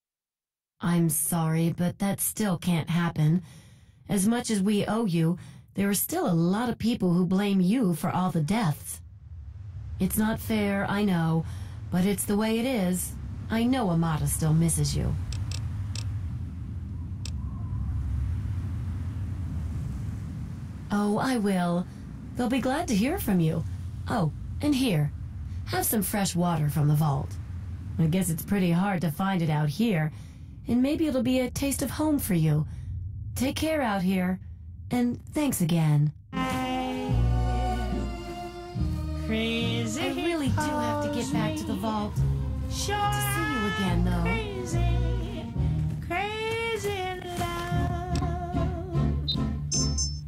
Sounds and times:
Speech: 0.8s - 3.5s, 4.1s - 9.0s, 10.0s - 15.2s, 20.9s - 25.1s, 25.7s - 27.4s, 28.0s - 32.8s, 33.4s - 37.2s, 39.3s - 42.2s, 42.8s - 45.4s.

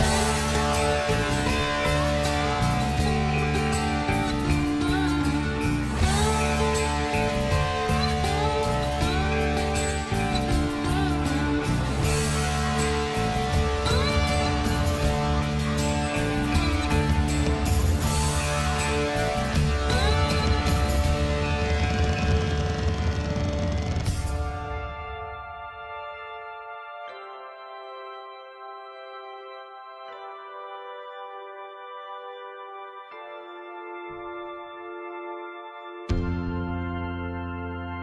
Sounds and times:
Music: 0.0s - 38.0s.

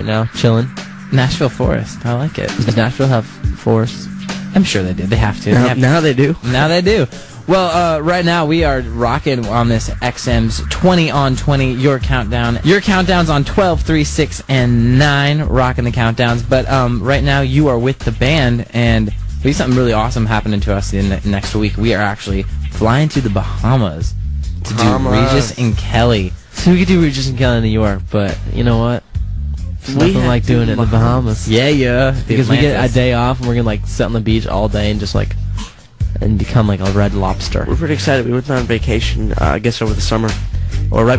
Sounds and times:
Speech: 0.0s - 29.0s, 29.6s - 41.1s
Music: 0.0s - 41.1s.

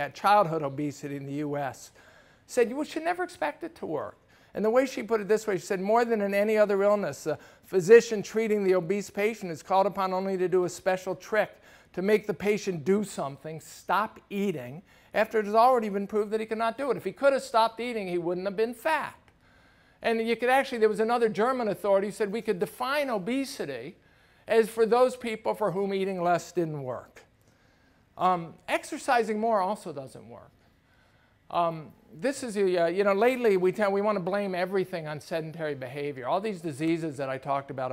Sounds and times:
Speech: 0.0s - 19.3s, 20.0s - 27.3s, 28.2s - 30.5s, 31.5s - 37.9s.

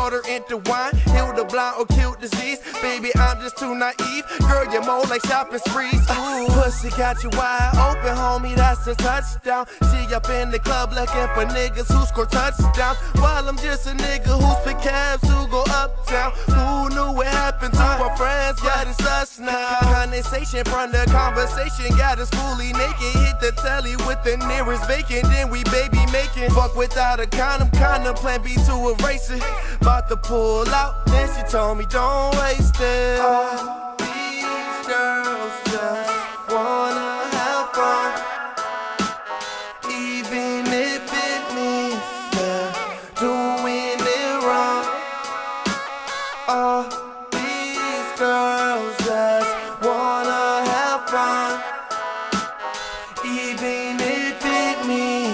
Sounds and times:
Hip hop music: 0.0s - 55.3s.

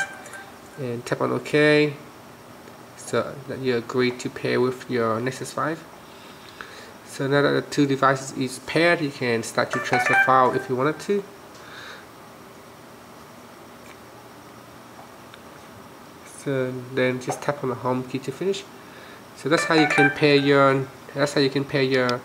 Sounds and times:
Speech: 0.8s - 2.1s, 3.0s - 5.9s, 7.1s - 11.3s, 16.3s - 18.7s, 19.4s - 22.2s.

